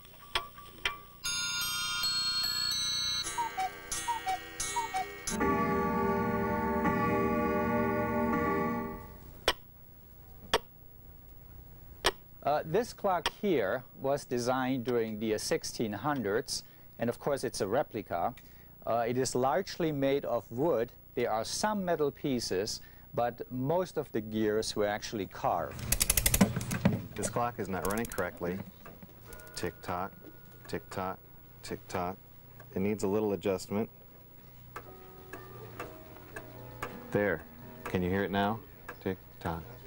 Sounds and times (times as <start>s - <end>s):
Speech: 12.4s - 25.7s, 27.2s - 28.7s, 29.6s - 33.9s, 37.1s - 39.8s.